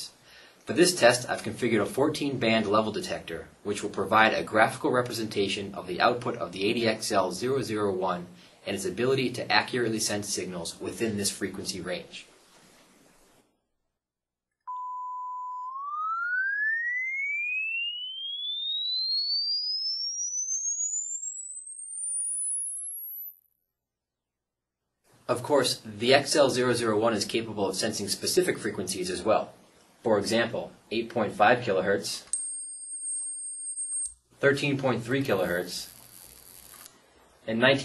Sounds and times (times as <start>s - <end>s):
Speech: 0.0s - 12.3s, 25.3s - 32.3s, 34.4s - 35.9s, 37.5s - 37.8s.